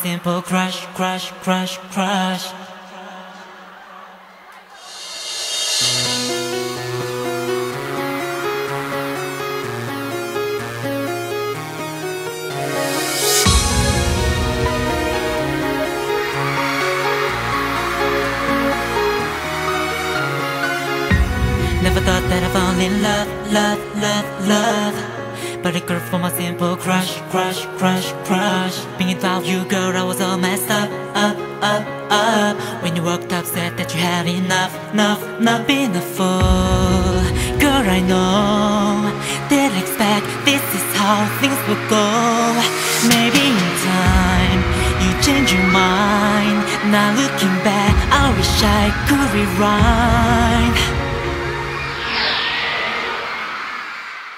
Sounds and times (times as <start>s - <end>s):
Theme music: 4.0s - 24.9s, 36.7s - 54.3s.